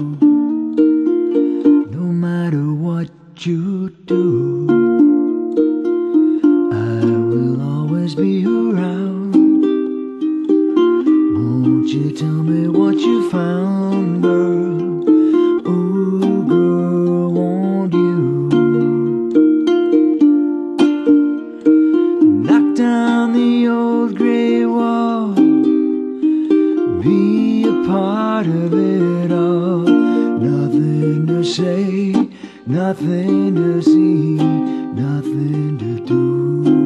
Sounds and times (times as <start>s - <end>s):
Ukulele: 0.0s - 36.8s.